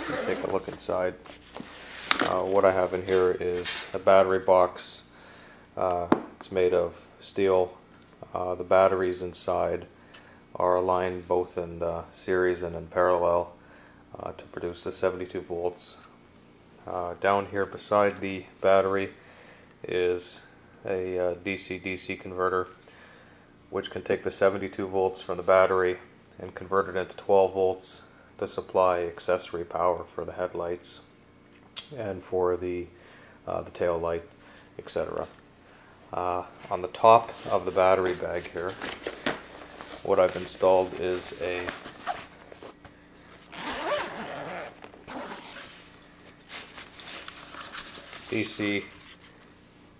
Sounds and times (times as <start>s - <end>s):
Speech: 0.0s - 1.2s, 2.2s - 5.1s, 5.8s - 9.9s, 10.6s - 16.1s, 16.8s - 19.2s, 19.8s - 22.8s, 23.7s - 31.1s, 31.8s - 35.4s, 36.1s - 39.0s, 40.0s - 41.9s, 48.3s - 49.0s.